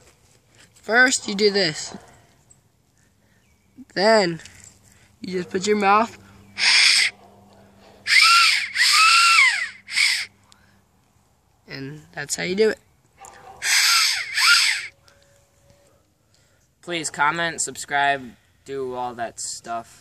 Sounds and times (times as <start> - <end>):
Outside, rural or natural: 0.0 - 20.0.